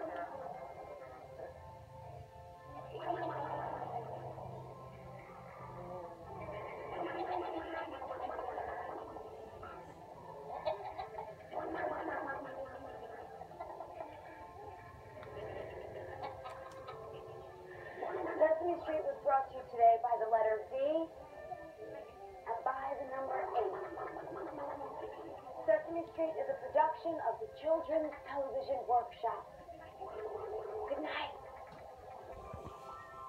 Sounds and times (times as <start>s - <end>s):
Background music: 0.0s - 33.2s
Speech: 25.7s - 29.5s.